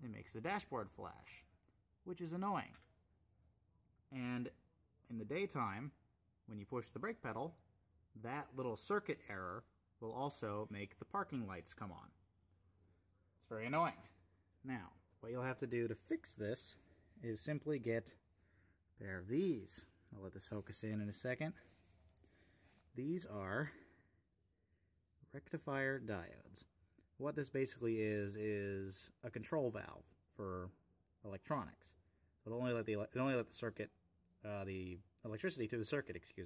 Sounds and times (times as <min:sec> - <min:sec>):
Speech: 0:00.0 - 0:02.9, 0:04.1 - 0:12.2, 0:13.4 - 0:18.3, 0:19.0 - 0:21.7, 0:22.9 - 0:24.0, 0:25.2 - 0:36.4.